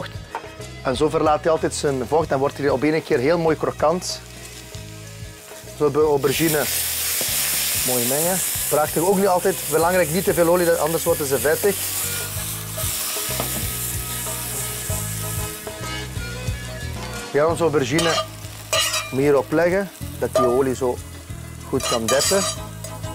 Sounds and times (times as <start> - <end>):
Sizzle: 0.6 - 23.1
Frying (food): 1.7 - 23.1.